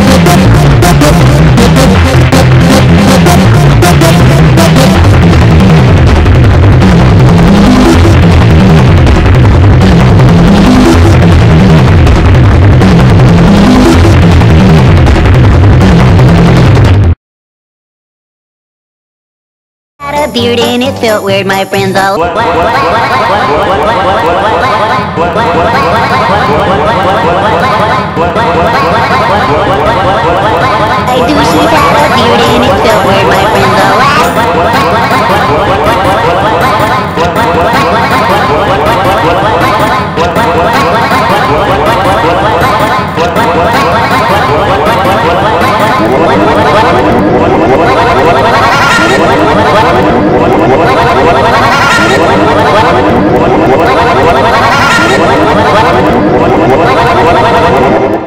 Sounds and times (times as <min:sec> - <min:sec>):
Music: 0:00.0 - 0:17.2, 0:20.0 - 0:24.0, 0:24.6 - 0:58.2.